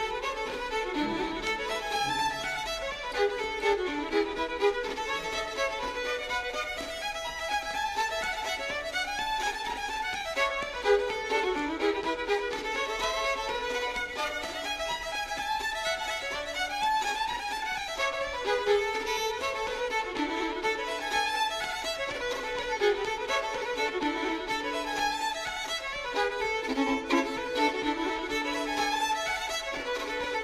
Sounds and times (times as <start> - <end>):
Violin, fiddle: 0.0 - 30.4.